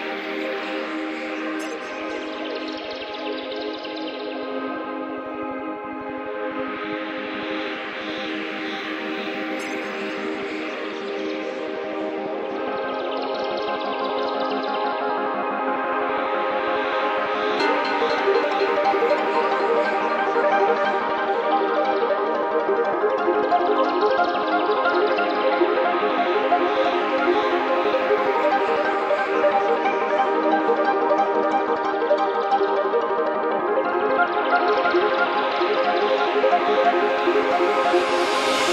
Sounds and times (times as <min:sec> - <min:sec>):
Ambient music: 0:00.0 - 0:38.7.